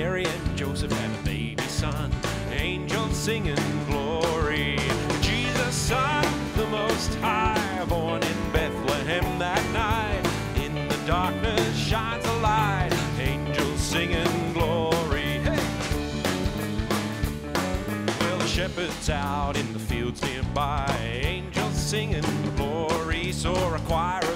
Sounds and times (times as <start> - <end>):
Male singing: 0.0 - 15.8, 18.2 - 24.3
Music: 0.0 - 24.3.